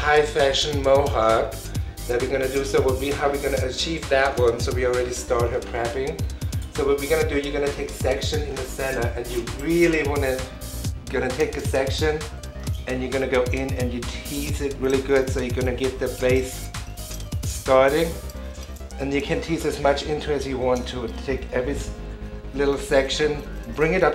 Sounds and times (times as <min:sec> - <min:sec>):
Speech: 0:00.0 - 0:06.2, 0:06.8 - 0:10.5, 0:11.1 - 0:12.3, 0:12.9 - 0:16.7, 0:17.6 - 0:18.2, 0:19.0 - 0:24.1
Music: 0:00.0 - 0:24.1.